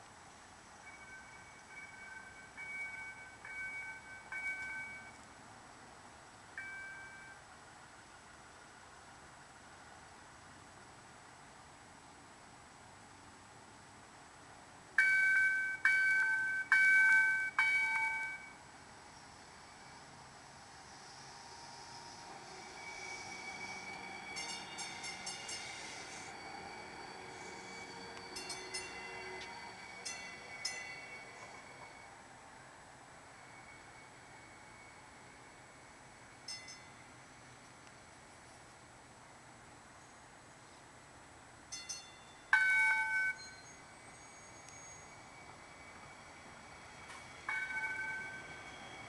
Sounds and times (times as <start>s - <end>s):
Outside, urban or manmade: 0.0s - 49.0s.